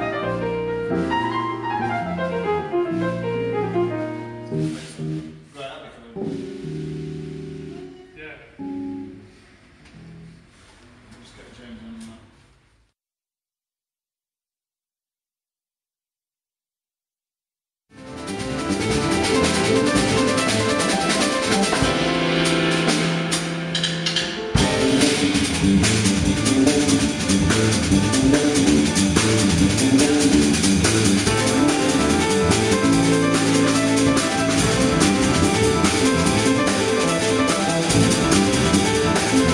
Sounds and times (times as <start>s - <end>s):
Speech: 5.6s - 6.3s, 7.8s - 8.6s, 11.1s - 12.3s.